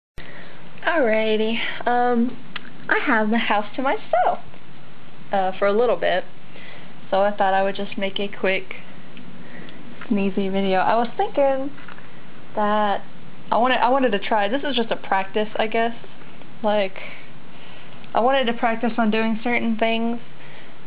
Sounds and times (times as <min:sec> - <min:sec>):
Speech: 0:00.8 - 0:04.5, 0:05.3 - 0:06.3, 0:07.1 - 0:08.8, 0:10.1 - 0:11.8, 0:12.6 - 0:16.0, 0:16.6 - 0:17.1, 0:18.1 - 0:20.2.